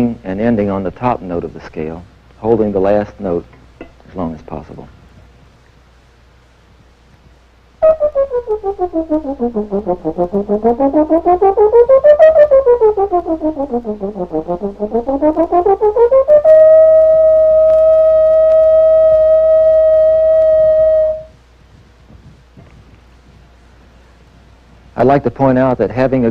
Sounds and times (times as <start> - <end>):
Trombone: 7.8 - 21.3.